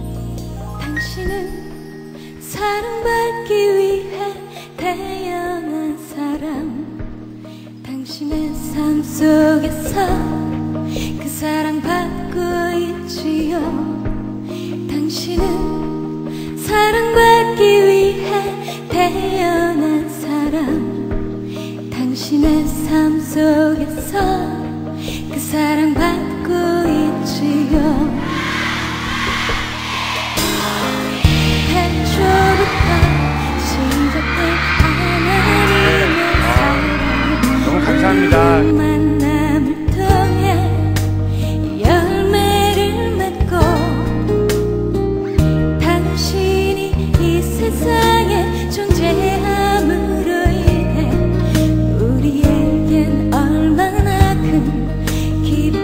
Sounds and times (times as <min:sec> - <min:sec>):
Music: 0:00.0 - 0:55.8.